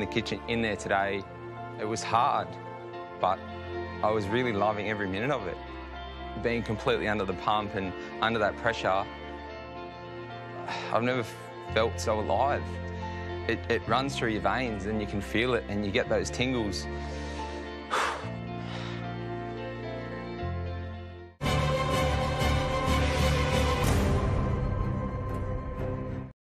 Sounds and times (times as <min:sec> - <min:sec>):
Male speech, man speaking: 0:00.0 - 0:01.2, 0:01.8 - 0:02.5, 0:04.0 - 0:05.6, 0:06.4 - 0:09.0, 0:10.9 - 0:12.6, 0:13.5 - 0:16.8
Music: 0:00.0 - 0:26.4.